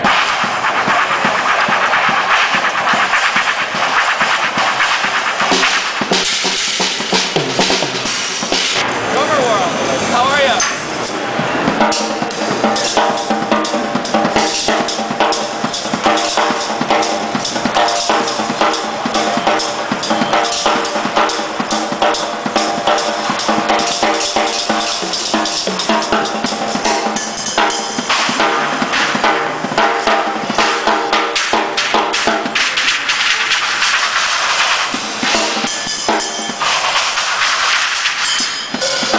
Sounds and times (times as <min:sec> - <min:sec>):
Music: 0:00.0 - 0:08.8, 0:10.6 - 0:39.1.